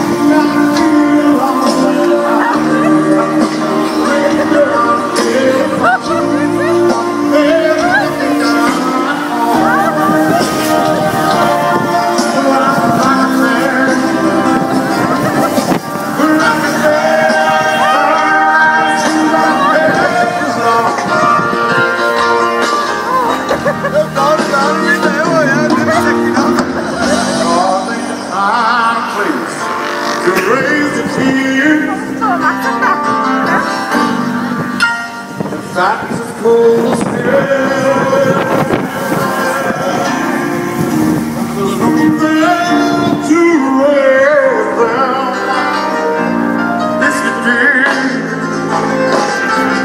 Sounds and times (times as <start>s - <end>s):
Music: 0.0s - 49.8s
Wind noise (microphone): 14.5s - 16.2s, 21.0s - 22.1s, 34.5s - 42.2s.